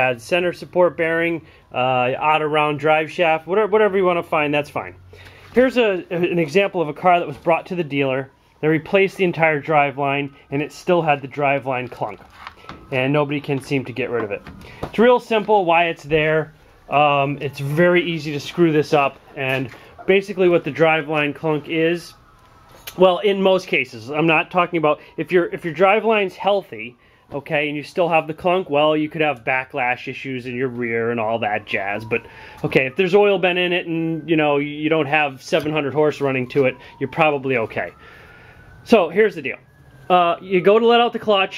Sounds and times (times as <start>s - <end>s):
Speech: 0.0s - 5.0s, 5.6s - 12.2s, 12.9s - 22.2s, 23.0s - 38.0s, 38.9s - 41.5s.